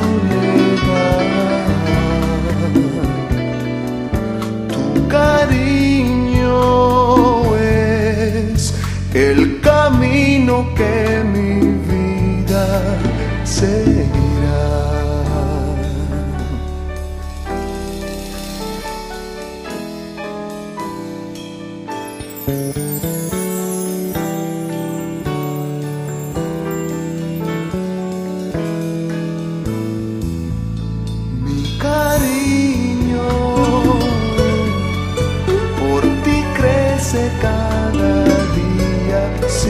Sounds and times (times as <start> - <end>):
Music: 0.0 - 39.7.